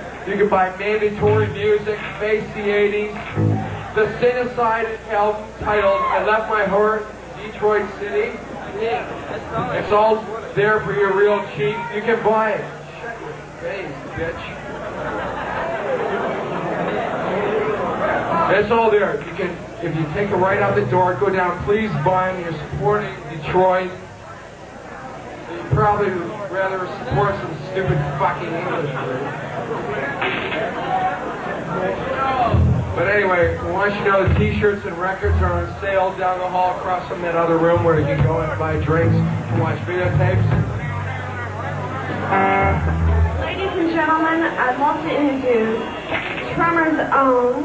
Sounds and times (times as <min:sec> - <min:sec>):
Speech: 0:00.3 - 0:14.6, 0:16.9 - 0:24.0, 0:24.9 - 0:41.8.